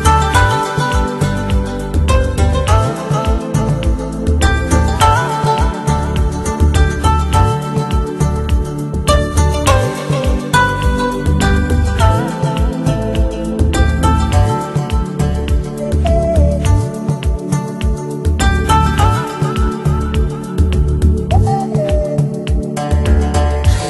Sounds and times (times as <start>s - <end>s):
Music: 0.0s - 23.9s.